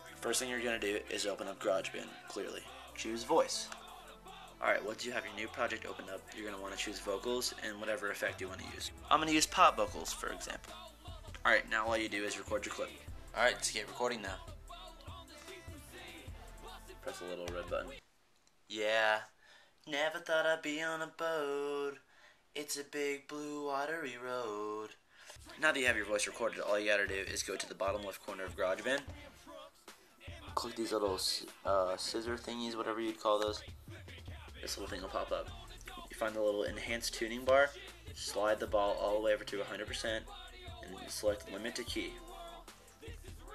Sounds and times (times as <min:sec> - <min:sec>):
Music: 0:00.0 - 0:18.0, 0:25.3 - 0:43.5
Speech: 0:00.1 - 0:03.8, 0:04.6 - 0:10.8, 0:11.4 - 0:14.4, 0:17.0 - 0:18.0, 0:18.7 - 0:22.0, 0:22.6 - 0:29.1, 0:30.5 - 0:33.7, 0:34.6 - 0:42.3.